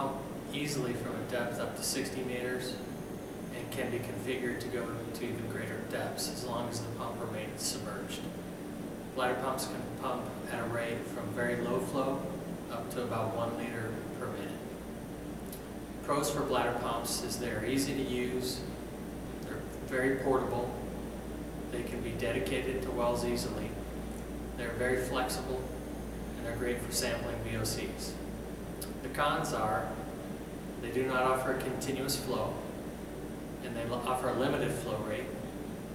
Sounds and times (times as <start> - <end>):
Speech: 0.0 - 2.9, 3.5 - 8.4, 9.2 - 14.7, 16.0 - 18.8, 19.4 - 20.9, 21.7 - 23.8, 24.6 - 25.8, 26.4 - 30.2, 30.8 - 32.8, 33.6 - 35.5.